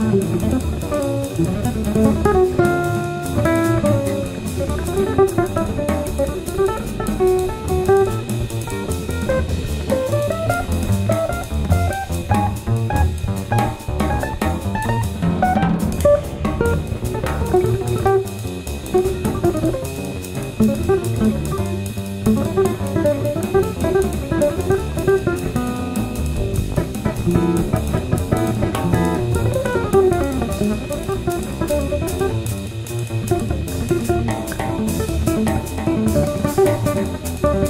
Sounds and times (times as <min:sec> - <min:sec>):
Drum: 0:00.0 - 0:37.6
Drum kit: 0:00.0 - 0:37.6
Guitar: 0:00.0 - 0:37.6
Jazz: 0:00.0 - 0:37.6.